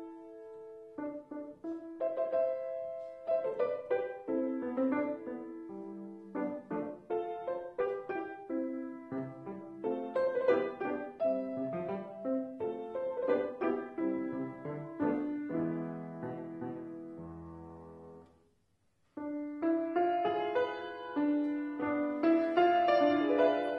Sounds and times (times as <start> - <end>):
Music: 0.0 - 18.4, 19.2 - 23.7.